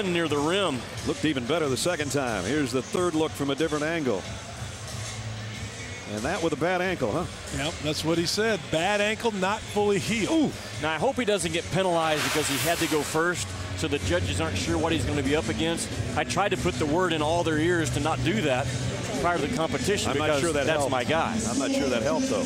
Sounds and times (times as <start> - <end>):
Speech: 0.0 - 4.2, 6.1 - 22.4
Music: 0.0 - 22.4.